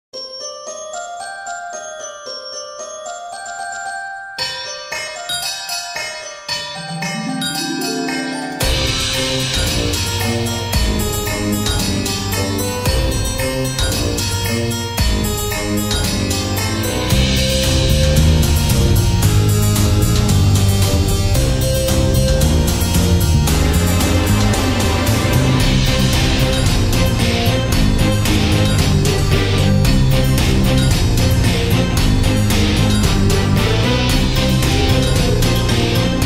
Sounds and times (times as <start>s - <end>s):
Electronic music: 4.8s - 36.2s.